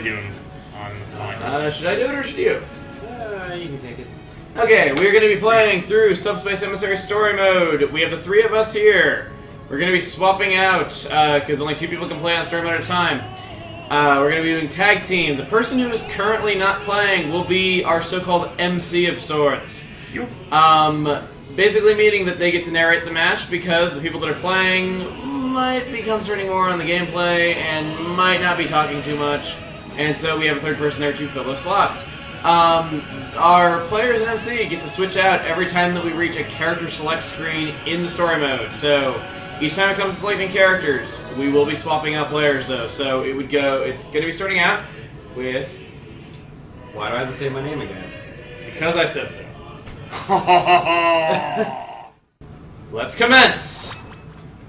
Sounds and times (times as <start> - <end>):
Speech: 0.0 - 45.8, 46.9 - 49.5, 52.9 - 54.0
Music: 0.0 - 51.1.